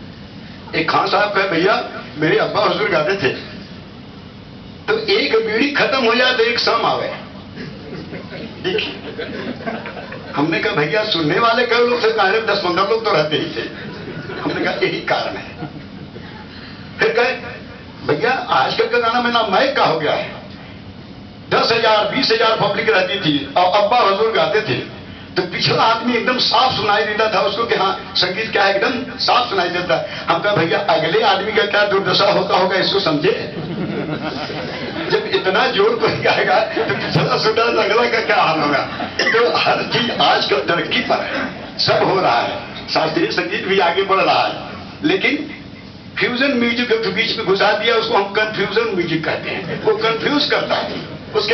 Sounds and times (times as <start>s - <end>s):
Speech: 0.7s - 3.6s, 4.9s - 7.3s, 10.3s - 13.8s, 14.4s - 15.6s, 17.0s - 20.5s, 21.5s - 33.6s, 35.0s - 45.6s, 46.2s - 51.5s.